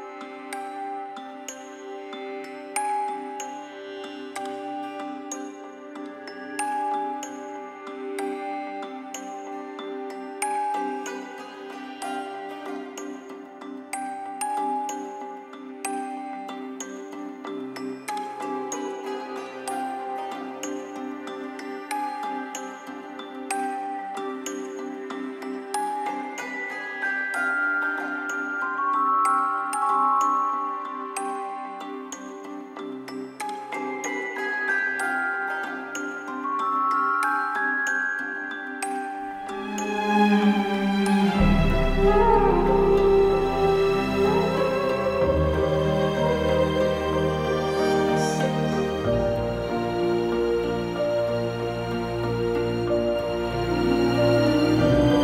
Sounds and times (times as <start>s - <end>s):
Tender music: 0.0s - 55.2s.